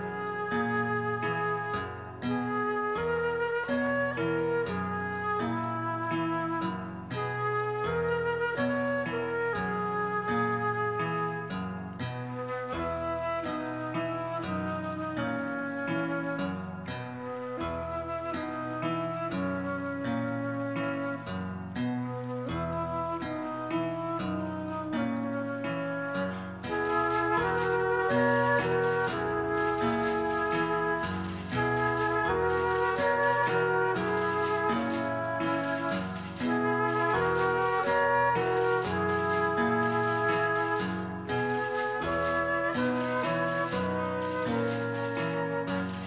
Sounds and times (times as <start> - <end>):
Music: 0.0 - 46.0.